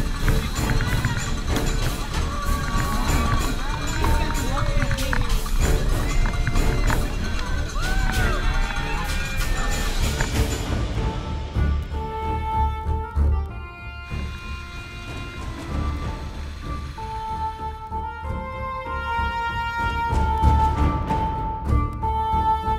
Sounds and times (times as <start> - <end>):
Run: 0.0 - 10.7
Music: 0.0 - 22.7
Outside, urban or manmade: 0.0 - 22.7.